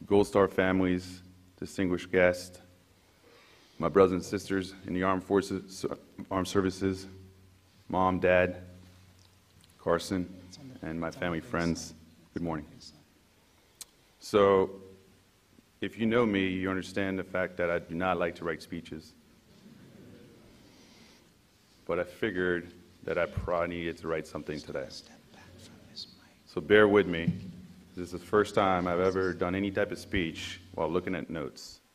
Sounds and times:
Male speech, man speaking: 0.0s - 2.7s, 3.8s - 7.2s, 7.9s - 8.8s, 9.8s - 13.1s, 14.2s - 14.9s, 15.8s - 19.2s, 21.8s - 27.4s, 28.0s - 31.8s
Narration, monologue: 0.0s - 31.9s.

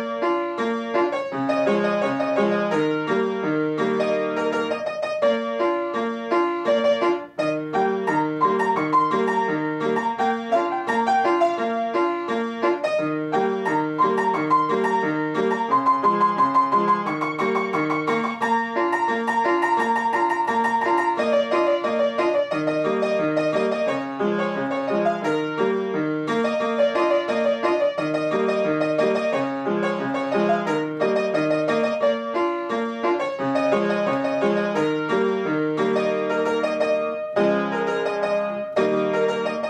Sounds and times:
Piano: 0.0s - 39.6s.

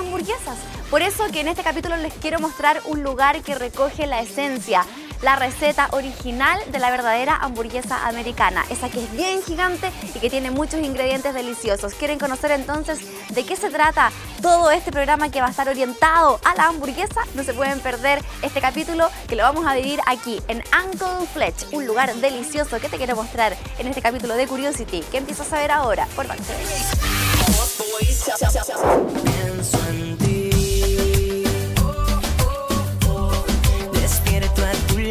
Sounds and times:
Speech: 0.0s - 26.9s
Music: 0.0s - 35.1s.

